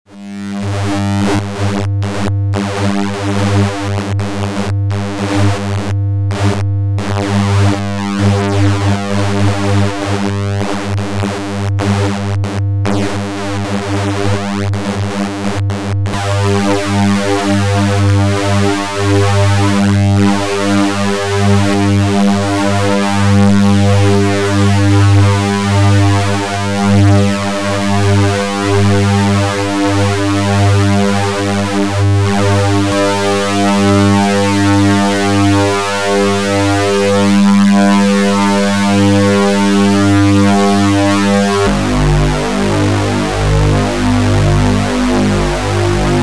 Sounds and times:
Sampler: 0:00.2 - 0:21.0, 0:21.6 - 0:46.2.

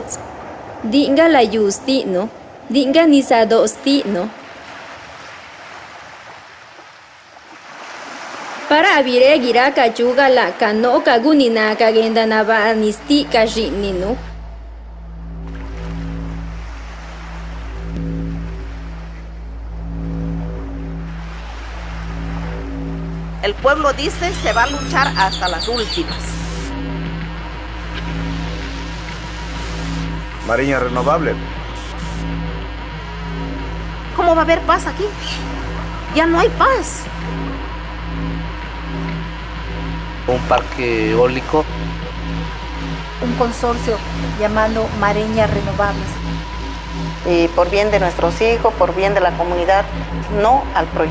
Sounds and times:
Speech: 0:00.9 - 0:04.4, 0:08.7 - 0:14.2, 0:23.4 - 0:26.2, 0:30.5 - 0:31.4, 0:34.2 - 0:35.3, 0:40.3 - 0:41.7, 0:43.2 - 0:46.2, 0:47.3 - 0:51.1
Music: 0:11.5 - 0:51.1.

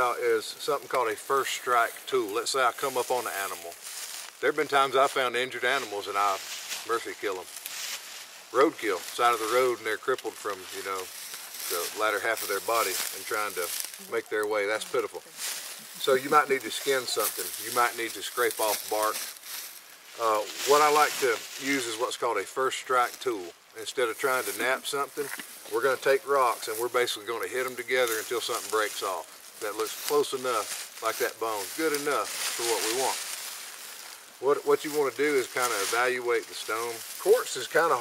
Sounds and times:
Speech: 0:00.0 - 0:03.8, 0:04.4 - 0:07.5, 0:08.6 - 0:15.2, 0:16.0 - 0:19.2, 0:20.2 - 0:33.2, 0:34.4 - 0:38.0.

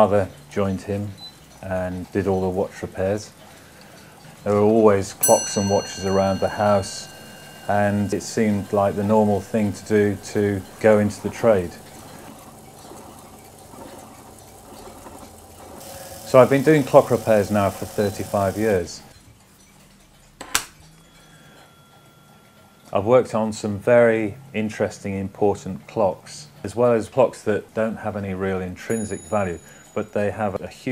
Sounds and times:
Speech: 0:00.0 - 0:03.4, 0:04.4 - 0:07.1, 0:07.7 - 0:11.8, 0:16.3 - 0:19.1, 0:22.9 - 0:30.9.

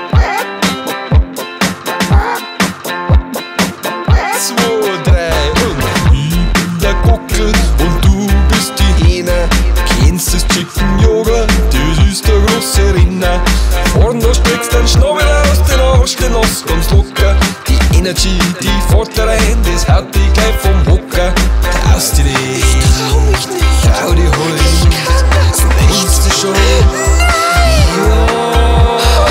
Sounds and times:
Music: 0:00.0 - 0:29.3.

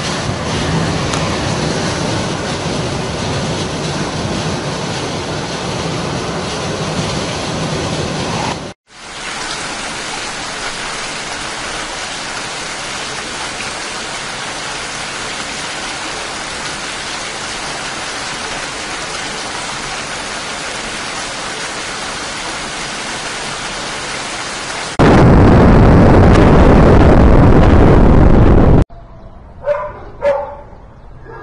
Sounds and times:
Rain on surface: 0:00.0 - 0:28.8.

